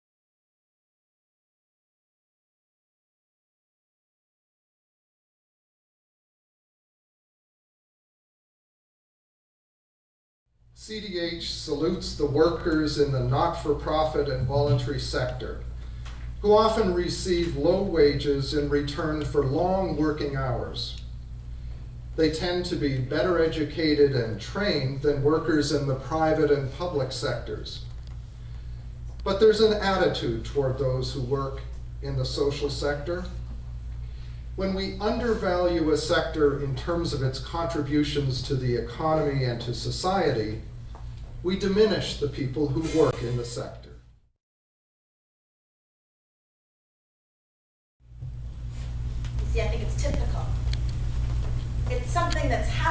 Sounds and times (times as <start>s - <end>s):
Narration, monologue: 10.6s - 44.3s, 48.3s - 52.9s.